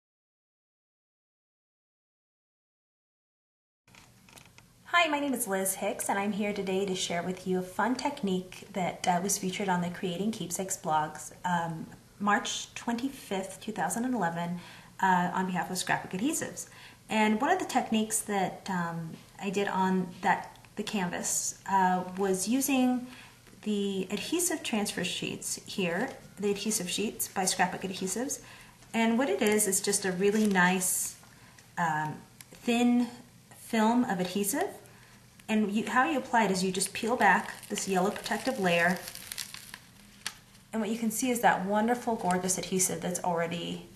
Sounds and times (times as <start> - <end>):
Speech: 4.9 - 31.2, 31.8 - 34.8, 35.5 - 39.1, 40.8 - 43.9.